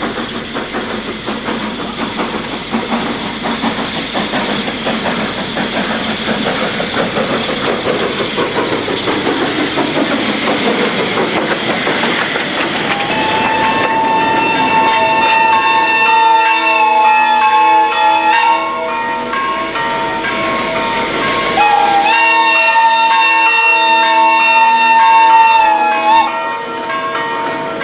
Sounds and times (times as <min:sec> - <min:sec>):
Clickety-clack: 0:00.0 - 0:15.7
Railroad car, train wagon: 0:00.0 - 0:27.8
Train horn: 0:12.9 - 0:19.0, 0:21.6 - 0:27.0.